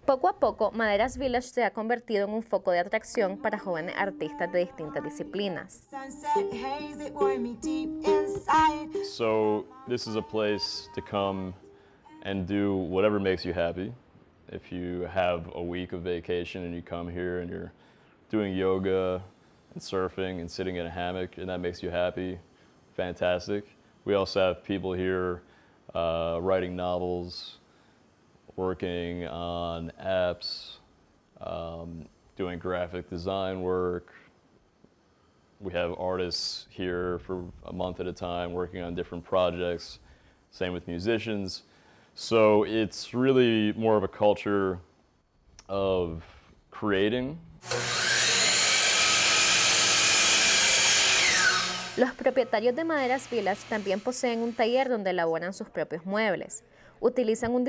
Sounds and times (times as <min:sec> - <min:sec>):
Speech: 0:00.1 - 0:05.8, 0:09.1 - 0:11.6, 0:12.3 - 0:17.7, 0:18.3 - 0:22.4, 0:23.0 - 0:27.6, 0:28.6 - 0:30.8, 0:31.4 - 0:34.2, 0:35.6 - 0:40.0, 0:40.6 - 0:41.6, 0:42.2 - 0:44.8, 0:45.6 - 0:47.5, 0:52.0 - 0:57.6
Drill: 0:47.6 - 0:52.2, 0:53.0 - 0:54.7.